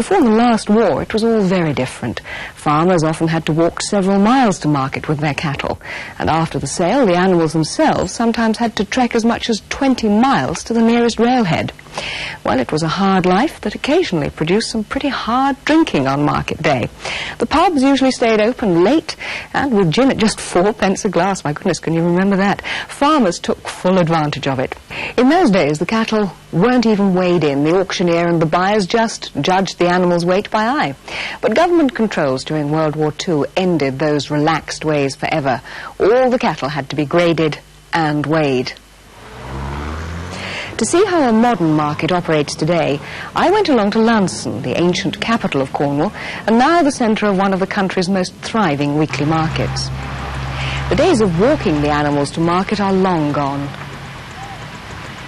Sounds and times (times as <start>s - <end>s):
Speech: 0.0s - 11.8s, 12.4s - 38.8s, 40.7s - 49.9s, 50.8s - 53.8s.